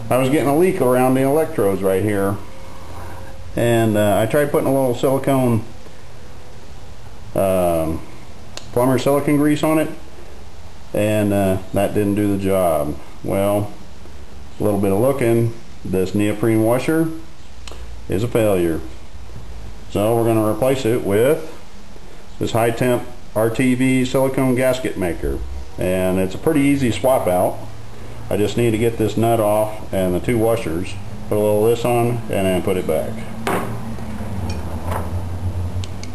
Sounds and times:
Speech: 0:00.0 - 0:02.4, 0:03.6 - 0:05.7, 0:07.3 - 0:08.1, 0:08.7 - 0:10.0, 0:10.9 - 0:13.8, 0:14.5 - 0:17.3, 0:18.1 - 0:19.0, 0:19.9 - 0:21.6, 0:22.3 - 0:27.7, 0:28.3 - 0:33.3.

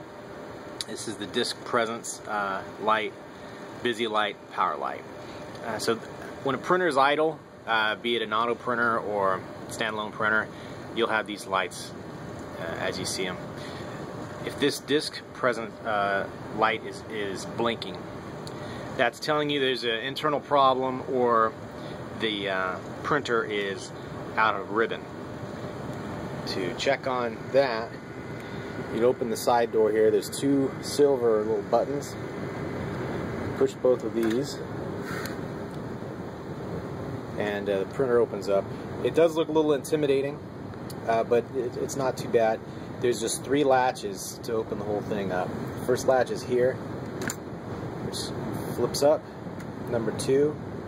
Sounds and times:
Speech: 0:00.8 - 0:03.2, 0:03.8 - 0:13.4, 0:14.4 - 0:18.0, 0:19.0 - 0:21.6, 0:22.2 - 0:25.1, 0:26.4 - 0:28.0, 0:28.9 - 0:32.2, 0:33.6 - 0:34.7, 0:37.4 - 0:46.8, 0:48.1 - 0:49.2, 0:49.9 - 0:50.6.

